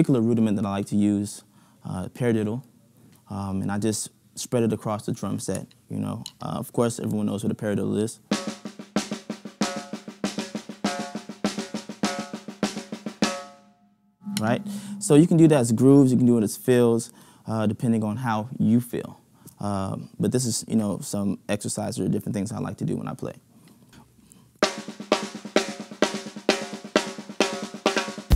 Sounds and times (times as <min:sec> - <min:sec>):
Speech: 0:00.0 - 0:02.7, 0:03.3 - 0:08.2, 0:14.4 - 0:23.5
Drum: 0:08.3 - 0:13.6, 0:14.3 - 0:15.8, 0:24.6 - 0:28.3
Drum kit: 0:08.3 - 0:13.6, 0:24.6 - 0:28.3.